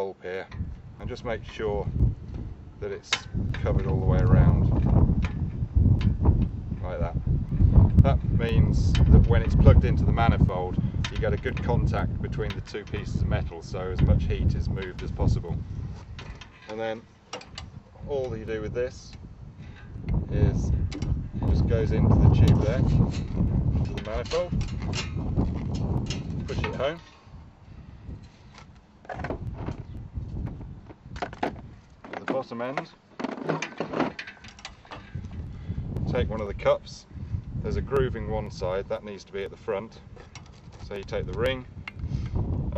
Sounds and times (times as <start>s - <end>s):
Speech: 0.0s - 1.9s, 2.8s - 4.7s, 6.8s - 7.2s, 8.0s - 15.6s, 16.7s - 17.0s, 18.0s - 19.2s, 20.3s - 20.8s, 21.5s - 23.0s, 23.9s - 24.6s, 26.4s - 27.1s, 32.1s - 33.0s, 36.1s - 40.0s, 40.8s - 41.7s
Outside, rural or natural: 0.0s - 42.7s.